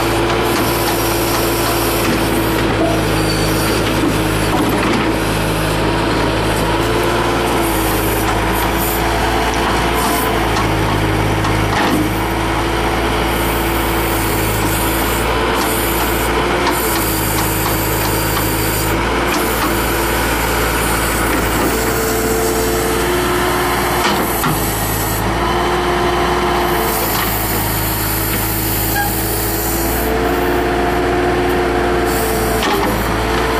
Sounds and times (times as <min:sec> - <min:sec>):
Lawn mower: 0:00.0 - 0:33.5
Vehicle: 0:00.0 - 0:33.5.